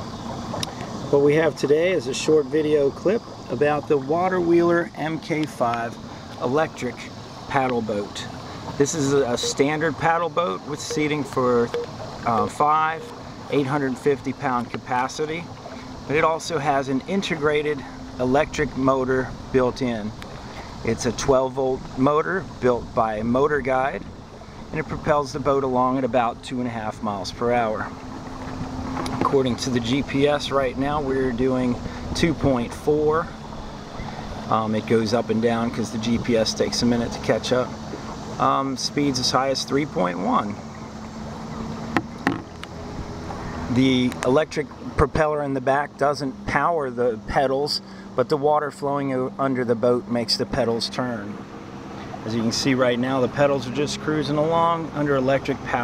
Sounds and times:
Sailboat, sailing ship: 0:00.0 - 0:55.8
Speech: 0:01.1 - 0:15.5, 0:16.1 - 0:20.2, 0:20.8 - 0:24.1, 0:24.7 - 0:27.9, 0:29.2 - 0:33.3, 0:34.5 - 0:37.8, 0:38.4 - 0:40.6, 0:43.7 - 0:51.4, 0:52.2 - 0:55.8.

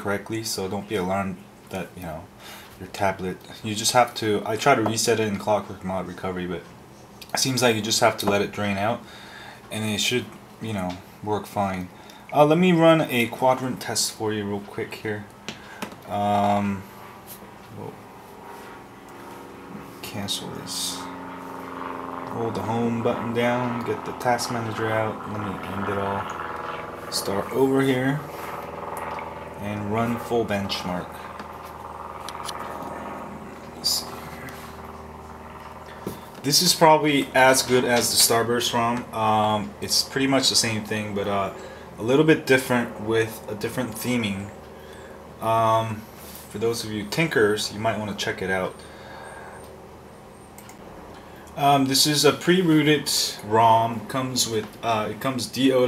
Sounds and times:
Speech: 0:00.0 - 0:09.1, 0:09.7 - 0:15.3, 0:16.1 - 0:16.9, 0:17.7 - 0:18.0, 0:20.0 - 0:21.1, 0:22.3 - 0:26.3, 0:27.1 - 0:28.3, 0:29.6 - 0:31.2, 0:33.8 - 0:34.5, 0:36.4 - 0:44.5, 0:45.4 - 0:48.8, 0:51.6 - 0:55.8.

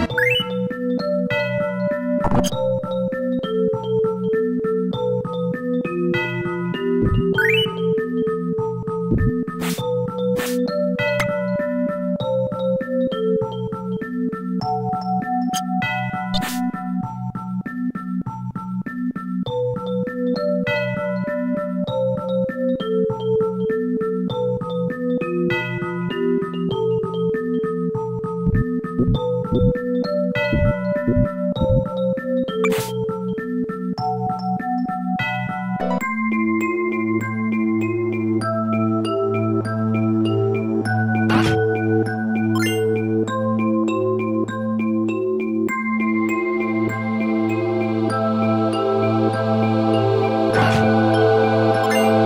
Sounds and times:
Synthesizer: 0:00.0 - 0:52.2.

